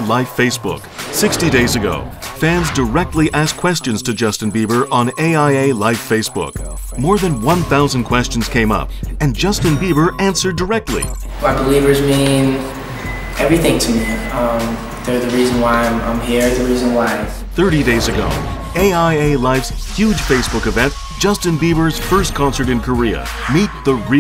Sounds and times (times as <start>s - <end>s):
Speech: 0.0s - 12.6s, 13.4s - 24.2s
Background music: 0.0s - 24.2s.